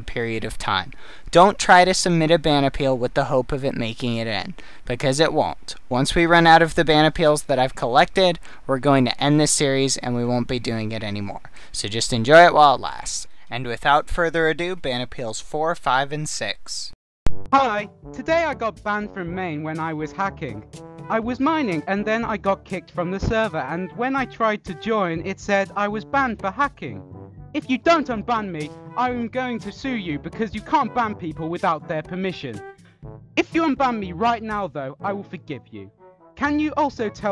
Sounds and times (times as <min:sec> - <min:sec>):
Speech: 0:00.0 - 0:17.0, 0:17.6 - 0:27.0, 0:27.6 - 0:32.6, 0:33.4 - 0:37.3
Music: 0:17.4 - 0:37.3.